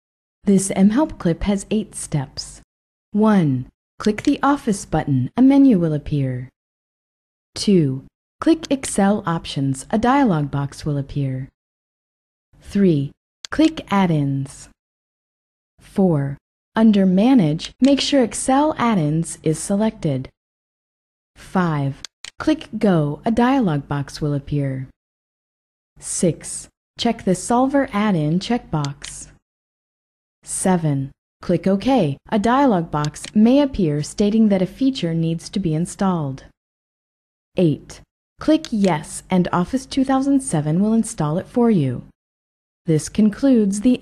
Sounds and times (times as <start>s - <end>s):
Speech: 0.5s - 2.6s, 3.2s - 6.6s, 7.6s - 11.5s, 12.6s - 14.8s, 15.9s - 20.3s, 21.4s - 24.9s, 26.0s - 29.4s, 30.5s - 36.5s, 37.6s - 42.2s, 42.9s - 44.0s.